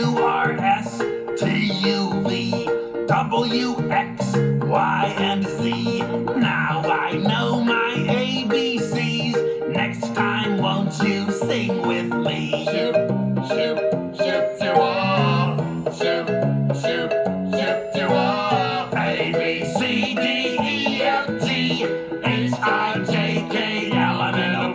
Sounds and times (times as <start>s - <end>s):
Music: 0.0s - 24.7s.